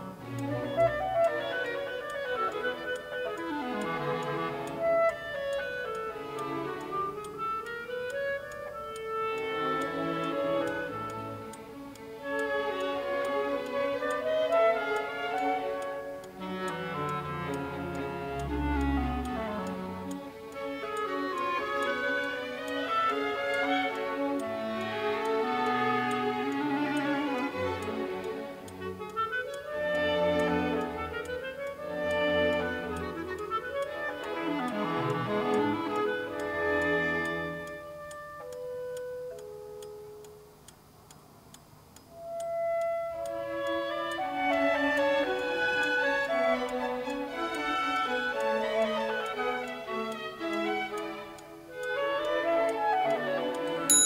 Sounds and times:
Music: 0.0s - 54.0s
Tick-tock: 0.0s - 54.0s
Tick: 0.2s - 54.0s.

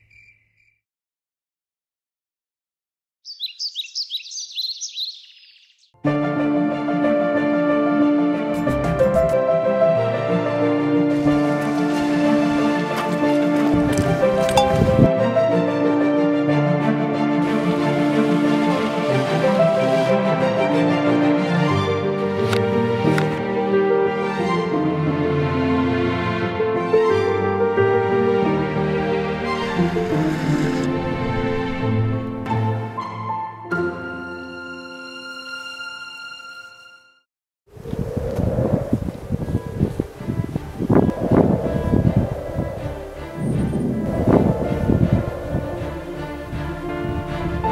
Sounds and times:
Music: 6.0s - 37.3s, 39.6s - 47.7s.

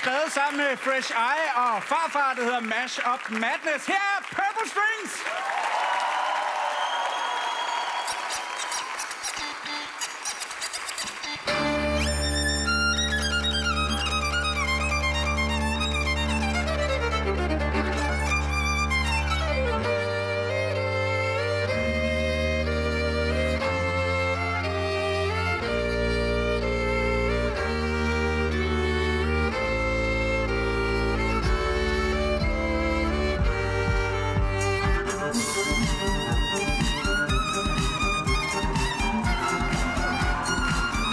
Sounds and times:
Classical music: 11.2s - 41.1s.

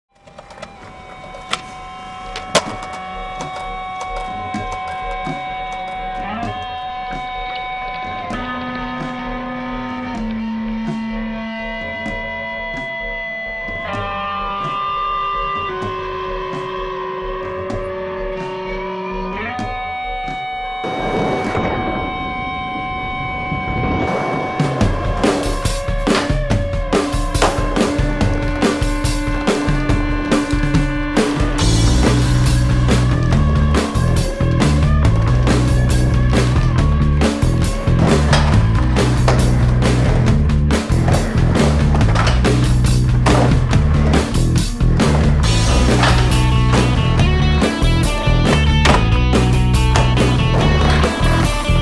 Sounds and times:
Music: 0.1s - 51.8s.

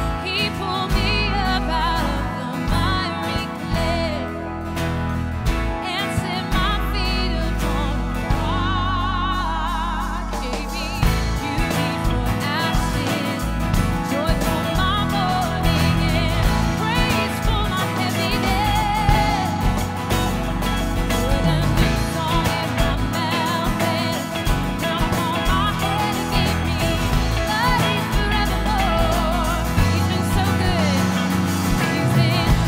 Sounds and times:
Music: 0.0s - 32.6s
Female singing: 0.1s - 4.5s, 5.8s - 20.3s, 21.0s - 32.6s.

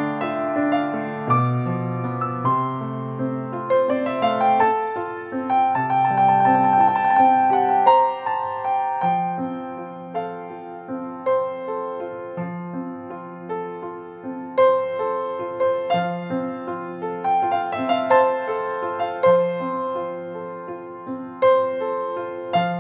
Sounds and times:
Music: 0.0s - 22.8s.

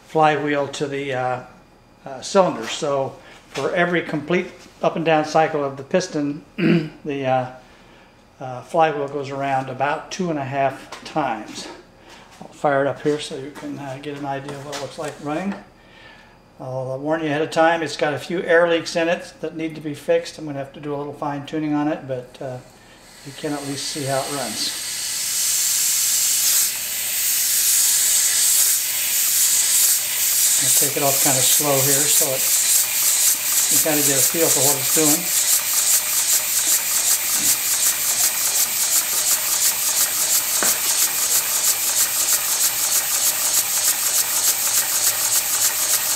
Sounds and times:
Speech: 0.1s - 7.6s, 8.4s - 11.8s, 12.4s - 15.7s, 16.6s - 22.7s, 23.3s - 24.8s, 30.6s - 32.5s, 33.7s - 35.3s.

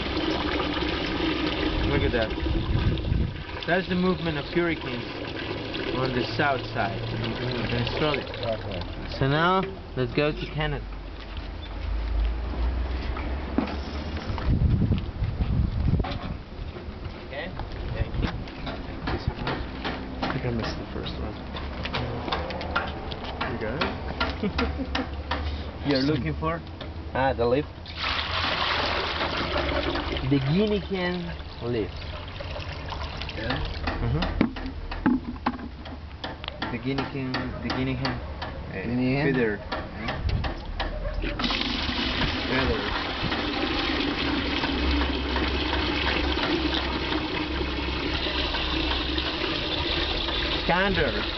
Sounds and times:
Sink (filling or washing): 0.0s - 9.2s, 27.9s - 33.8s, 41.4s - 51.3s
Water: 0.0s - 12.4s, 27.8s - 35.7s, 41.2s - 51.3s.

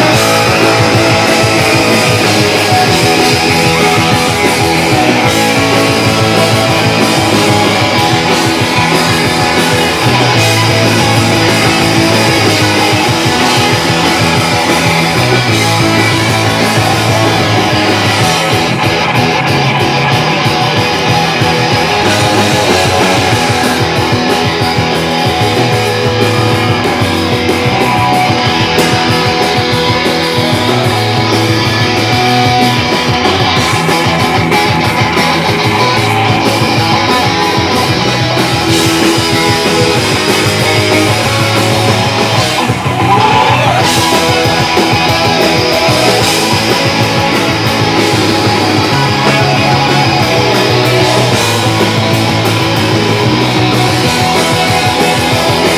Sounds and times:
Rock and roll: 0.0s - 55.7s.

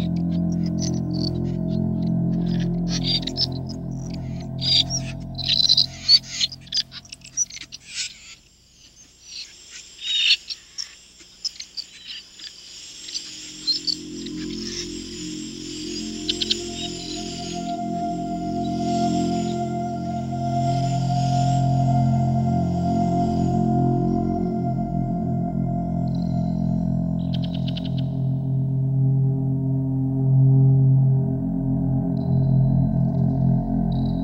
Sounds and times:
Music: 0.0s - 8.2s, 13.1s - 34.2s.

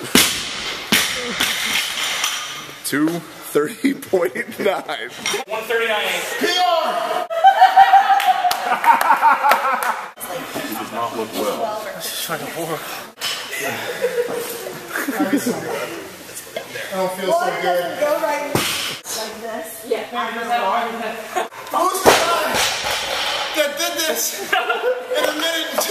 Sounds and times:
Male speech, man speaking: 2.8s - 7.2s, 10.3s - 12.9s, 16.7s - 18.2s, 21.7s - 22.6s, 23.6s - 24.5s, 25.1s - 25.9s.

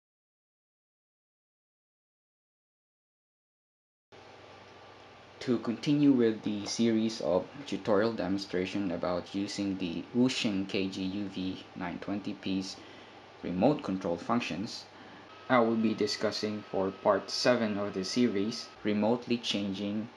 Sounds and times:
Speech: 5.4s - 12.8s, 13.4s - 14.9s, 15.5s - 20.1s.

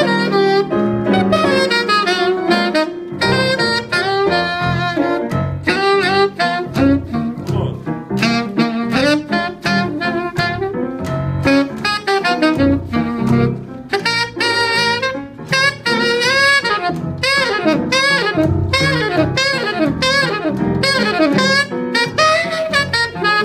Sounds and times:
Brass instrument: 0.0s - 23.4s
Saxophone: 0.0s - 23.4s.

